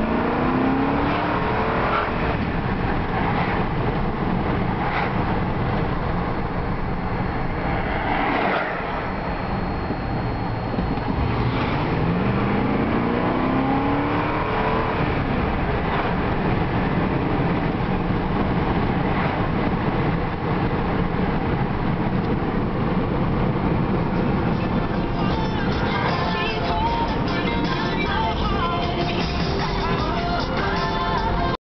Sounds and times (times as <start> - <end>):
Music: 24.5 - 31.6.